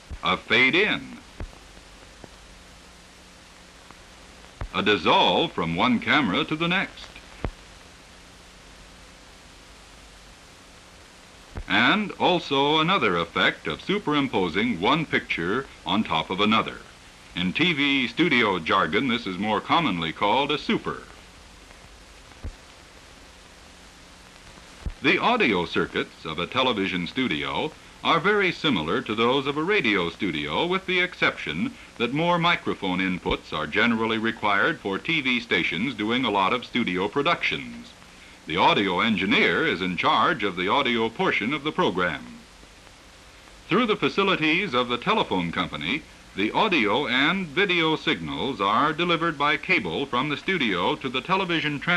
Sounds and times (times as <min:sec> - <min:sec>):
Speech: 0:00.1 - 0:01.3, 0:04.7 - 0:07.2, 0:11.6 - 0:21.2, 0:25.0 - 0:42.5, 0:43.7 - 0:51.9.